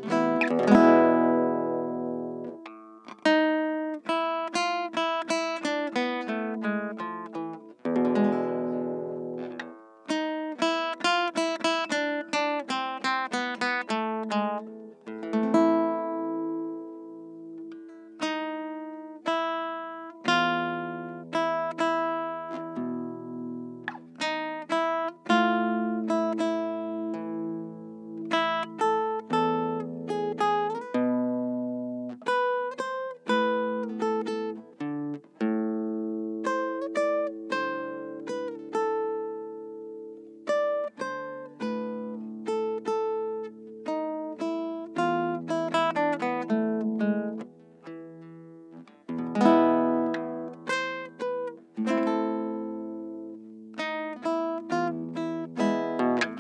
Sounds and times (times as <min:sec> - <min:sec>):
Acoustic guitar: 0:00.0 - 0:56.4
Strum: 0:00.0 - 0:56.4.